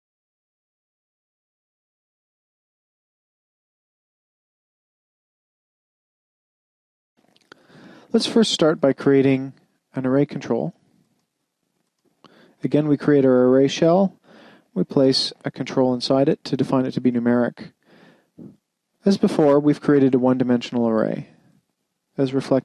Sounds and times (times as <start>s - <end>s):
Inside, small room: 7.2s - 22.6s
Speech: 8.1s - 10.8s, 12.6s - 17.8s, 18.4s - 21.4s, 22.2s - 22.6s.